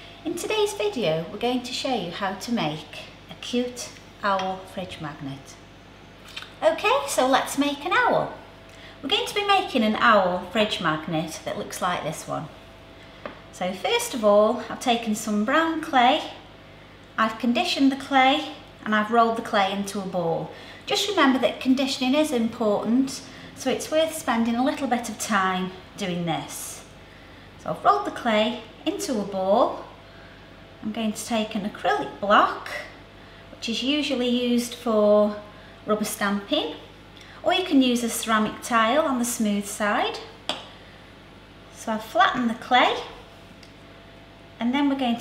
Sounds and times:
Speech: 0:00.2 - 0:05.6, 0:06.4 - 0:08.4, 0:09.0 - 0:12.6, 0:13.6 - 0:16.4, 0:17.2 - 0:26.9, 0:27.6 - 0:30.0, 0:30.8 - 0:33.0, 0:33.6 - 0:40.4, 0:41.7 - 0:43.2, 0:44.6 - 0:45.2.

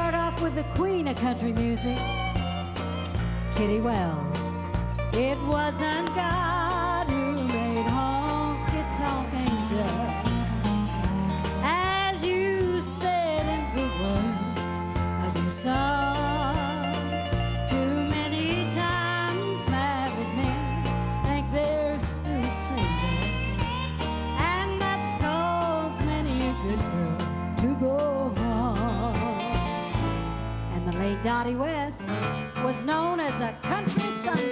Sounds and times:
Music: 0:00.0 - 0:34.5.

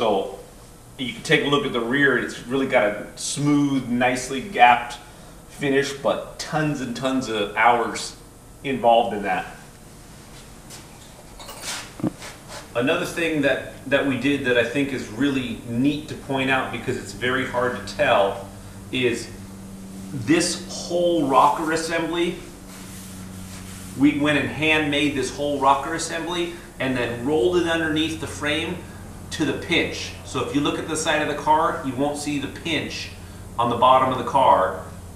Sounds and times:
Speech: 0:00.0 - 0:00.4, 0:01.0 - 0:09.6, 0:12.8 - 0:19.4, 0:20.2 - 0:22.5, 0:24.0 - 0:34.9.

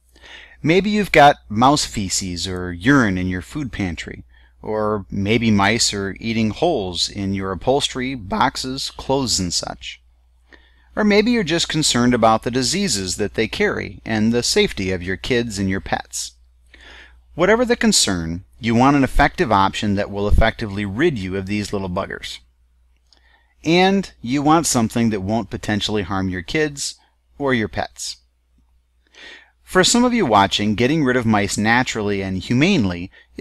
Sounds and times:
Speech: 0:00.6 - 0:10.0, 0:11.0 - 0:16.4, 0:17.4 - 0:22.5, 0:23.6 - 0:28.3, 0:29.7 - 0:33.4.

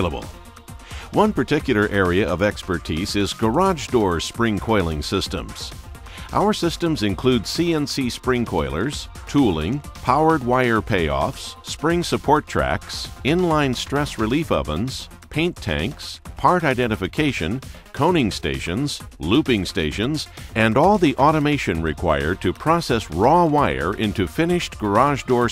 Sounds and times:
Speech: 0:00.0 - 0:00.3, 0:01.1 - 0:05.7, 0:06.3 - 0:25.5
Music: 0:00.0 - 0:25.5.

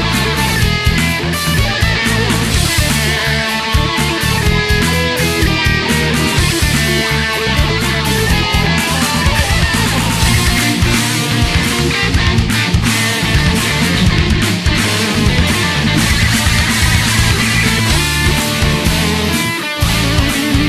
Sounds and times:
Background music: 0:00.0 - 0:20.6.

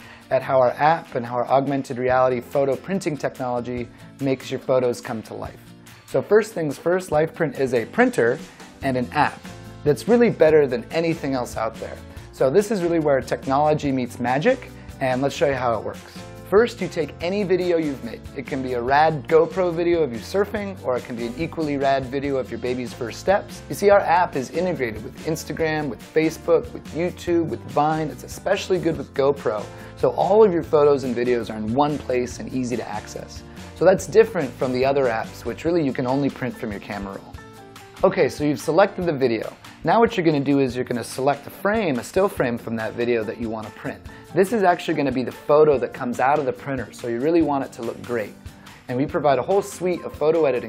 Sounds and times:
Music: 0:00.0 - 0:50.6
Speech: 0:00.3 - 0:37.4, 0:38.0 - 0:50.6.

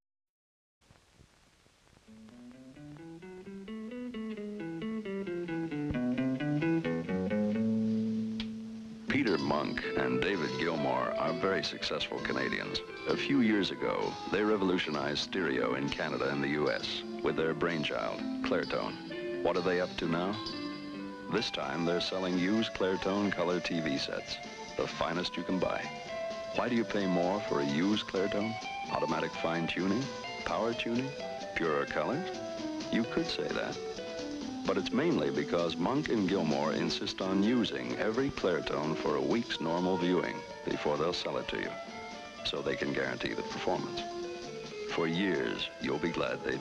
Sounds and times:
Music: 0:01.9 - 0:46.6
Speech: 0:09.1 - 0:20.6, 0:21.3 - 0:25.9, 0:26.6 - 0:32.3, 0:32.9 - 0:33.8, 0:34.7 - 0:41.8, 0:42.4 - 0:44.0, 0:44.9 - 0:46.6.

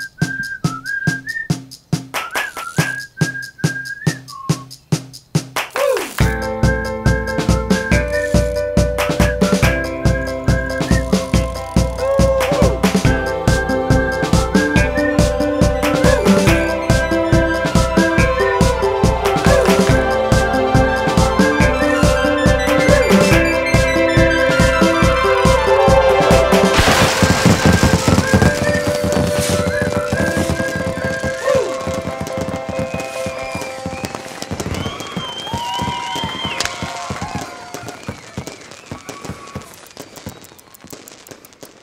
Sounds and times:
Music: 0:00.0 - 0:36.6.

